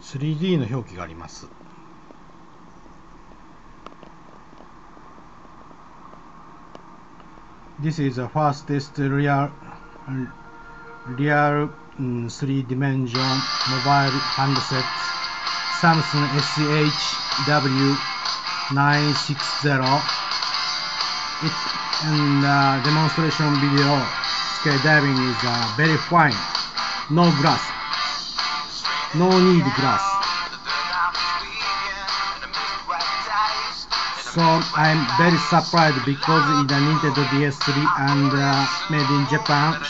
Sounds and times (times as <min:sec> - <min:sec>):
Speech: 0:00.0 - 0:01.6, 0:07.8 - 0:10.3, 0:11.1 - 0:15.1, 0:15.8 - 0:18.1, 0:18.7 - 0:20.1, 0:21.4 - 0:26.5, 0:27.1 - 0:27.7, 0:29.1 - 0:30.2, 0:34.2 - 0:39.9
Music: 0:09.7 - 0:12.2, 0:13.0 - 0:39.9.